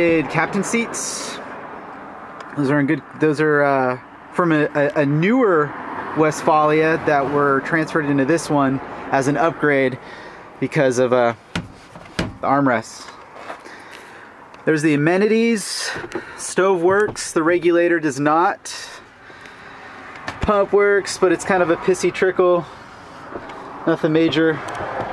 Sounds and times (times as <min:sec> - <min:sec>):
Car: 0:00.0 - 0:25.1.